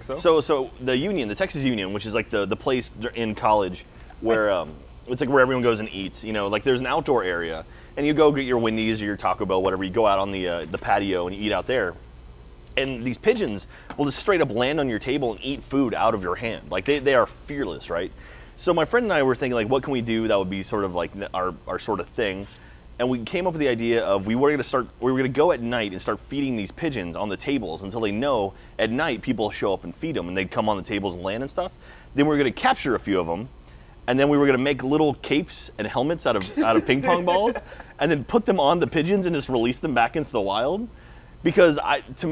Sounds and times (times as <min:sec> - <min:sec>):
Speech: 0:00.0 - 0:12.0, 0:12.8 - 0:33.5, 0:34.1 - 0:42.3.